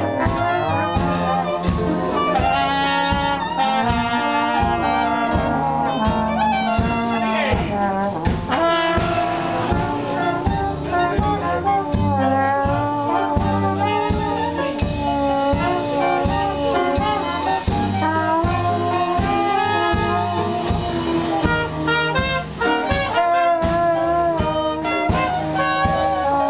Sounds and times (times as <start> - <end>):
Music: 0.0 - 26.4
Speech: 6.8 - 8.0.